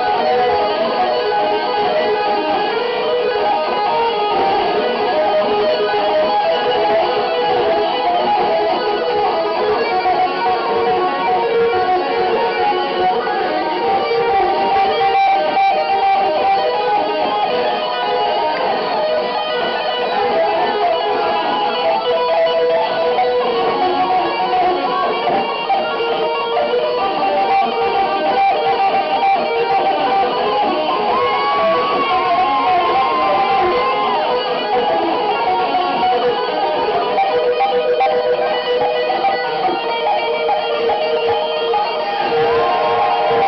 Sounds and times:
Guitar: 0.0s - 43.4s.

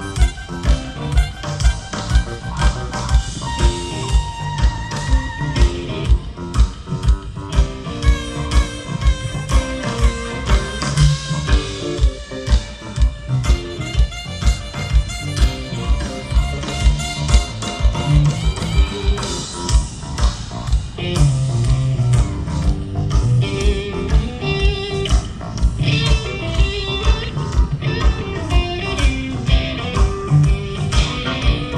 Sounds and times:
Music: 0.0s - 31.7s.

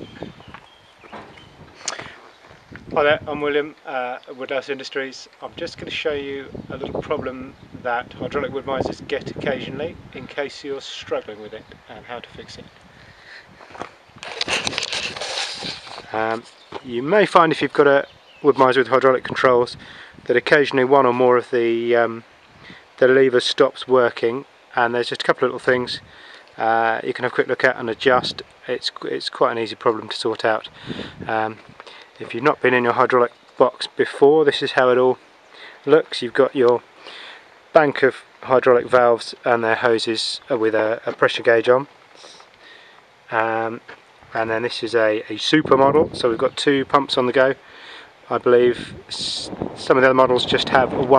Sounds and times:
Speech: 2.9s - 12.7s, 16.1s - 22.2s, 23.0s - 31.6s, 32.2s - 35.2s, 35.8s - 36.8s, 37.7s - 42.4s, 43.3s - 47.6s, 48.3s - 51.1s.

